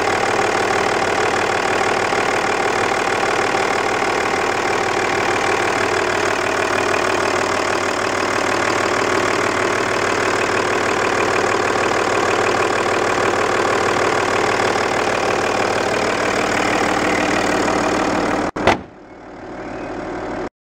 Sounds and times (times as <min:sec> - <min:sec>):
Car: 0:00.0 - 0:20.5
Heavy engine (low frequency): 0:00.0 - 0:20.5.